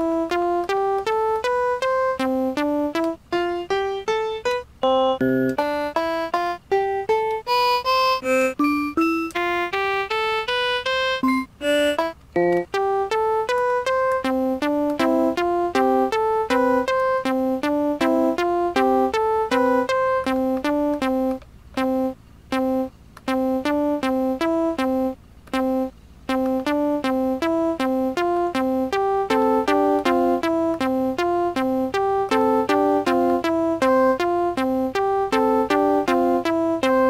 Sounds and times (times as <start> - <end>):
Sampler: 0.0 - 37.0.